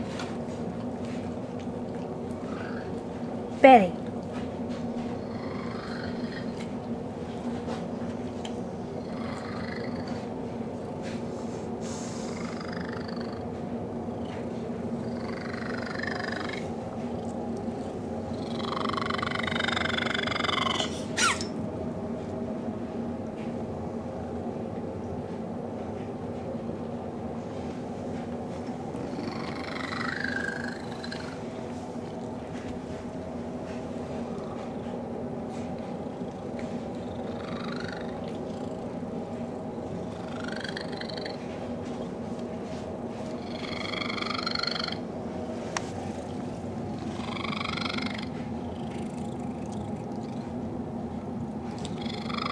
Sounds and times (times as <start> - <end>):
Purr: 2.4 - 3.2, 4.9 - 6.8, 8.9 - 10.4, 11.9 - 13.6, 14.2 - 21.4, 29.0 - 31.5, 35.6 - 39.0, 39.9 - 41.7, 43.3 - 45.0, 47.0 - 50.6, 51.7 - 52.5.